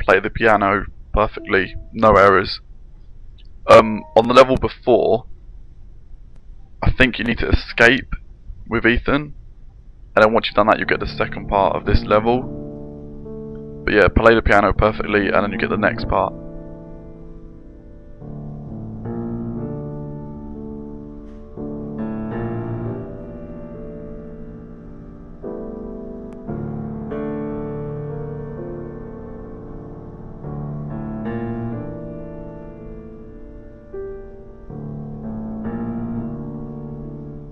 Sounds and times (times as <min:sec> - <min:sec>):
Music: 0:00.0 - 0:08.0, 0:08.8 - 0:37.5.